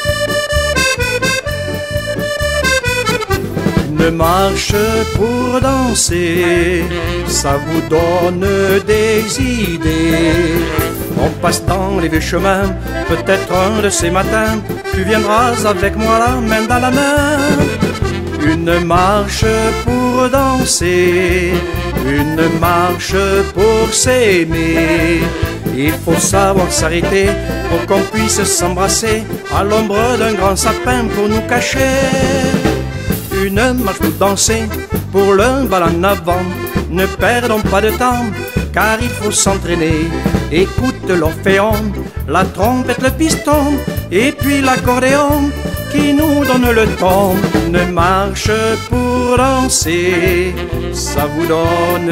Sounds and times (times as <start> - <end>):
Music: 0.0 - 52.1.